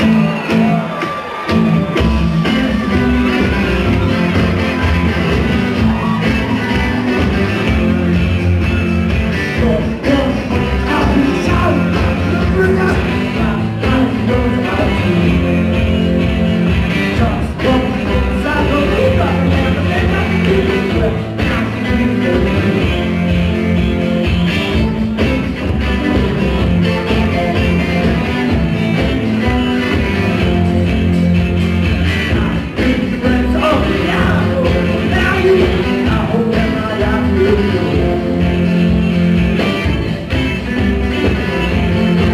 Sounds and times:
Music: 0.0s - 42.3s.

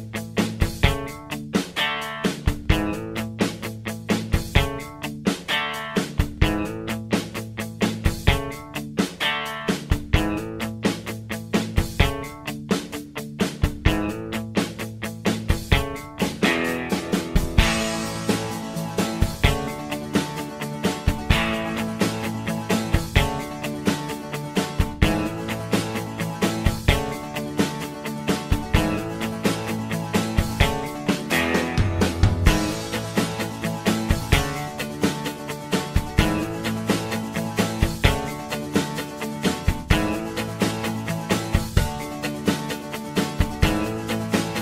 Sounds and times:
Music: 0.0s - 44.6s.

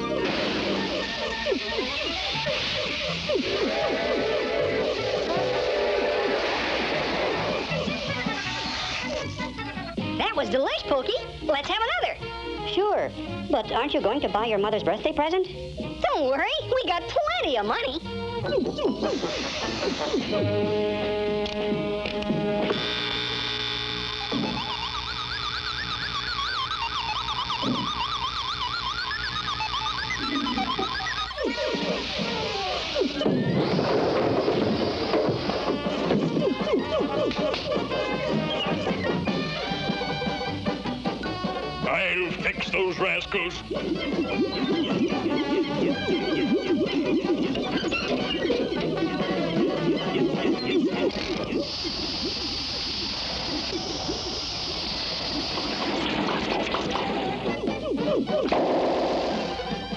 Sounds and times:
Music: 0.0s - 54.5s, 55.7s - 59.9s.

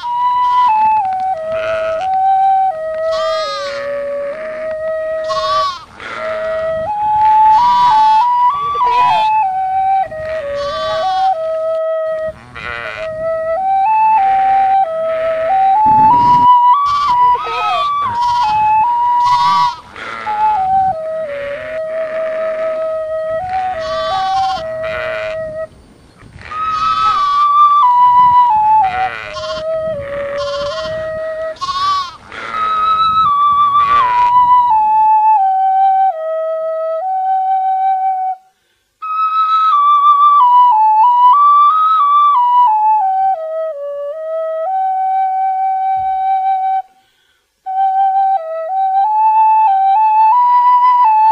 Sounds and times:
Bleat: 0.0s - 0.8s, 1.5s - 2.2s, 3.1s - 6.6s, 7.5s - 9.3s, 10.2s - 11.4s, 12.4s - 13.2s, 14.3s - 15.5s, 16.8s - 20.4s, 21.3s - 22.8s, 23.4s - 25.4s, 26.4s - 27.7s, 28.9s - 33.0s, 33.8s - 34.4s
Music: 0.0s - 3.1s, 3.7s - 5.4s, 6.2s - 10.6s, 11.2s - 12.4s, 13.0s - 25.7s, 27.4s - 30.3s, 31.0s - 31.6s, 32.8s - 46.9s, 47.7s - 51.3s.

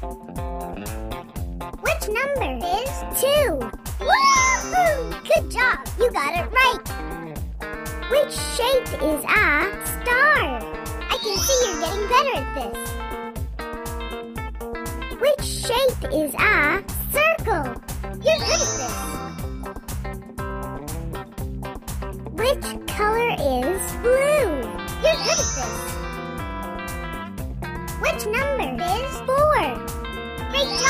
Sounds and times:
Music: 0.0s - 30.8s
Speech: 1.8s - 6.9s, 8.1s - 12.9s, 15.2s - 19.2s, 22.3s - 25.9s, 28.0s - 29.8s, 30.5s - 30.8s.

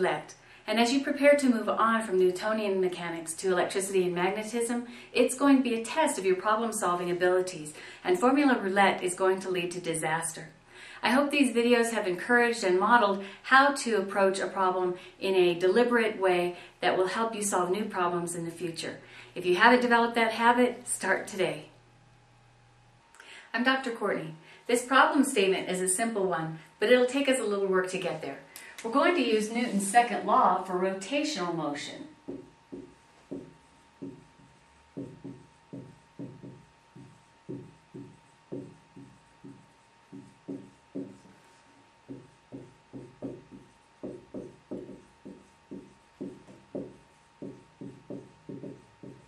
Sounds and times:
Speech: 0.0s - 21.7s, 23.6s - 32.2s.

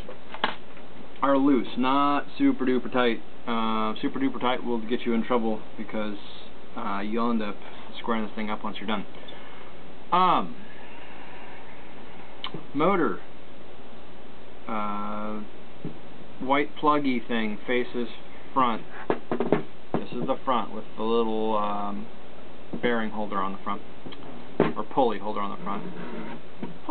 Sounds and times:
Speech: 1.2s - 9.2s, 10.1s - 10.6s, 12.5s - 13.3s, 14.7s - 15.5s, 16.4s - 18.9s, 20.0s - 22.1s, 22.8s - 23.9s, 24.6s - 26.2s.

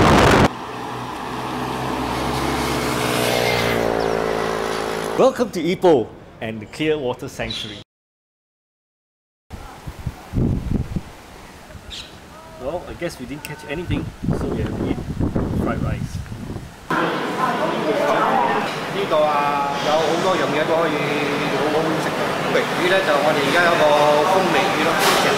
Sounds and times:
Wind noise (microphone): 0.0s - 0.5s, 9.6s - 12.0s, 13.8s - 16.9s.

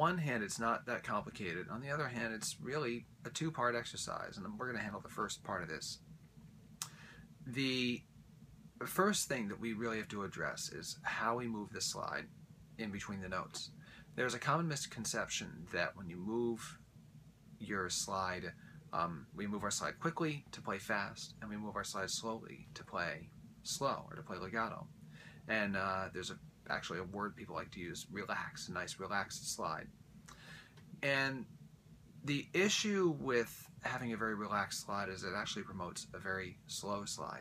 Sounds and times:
Speech: 0.0s - 6.0s, 7.4s - 8.0s, 8.8s - 16.8s, 17.6s - 24.9s, 25.5s - 29.9s, 31.0s - 31.5s, 32.2s - 37.4s.

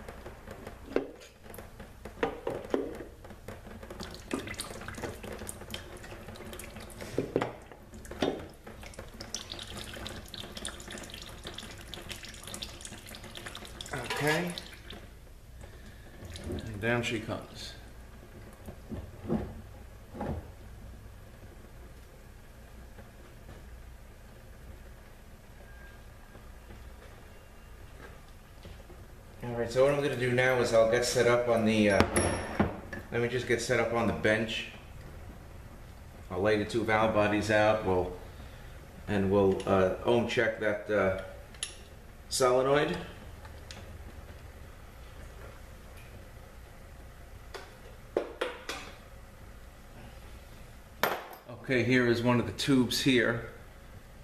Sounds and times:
Speech: 13.9s - 14.6s, 16.6s - 17.8s, 29.4s - 32.1s, 33.1s - 34.8s, 36.3s - 38.2s, 39.1s - 41.4s, 42.3s - 43.2s, 51.5s - 53.6s.

